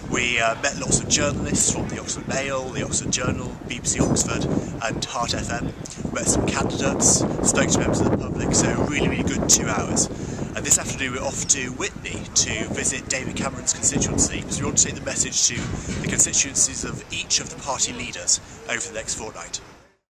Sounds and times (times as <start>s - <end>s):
Speech: 0.1s - 19.6s.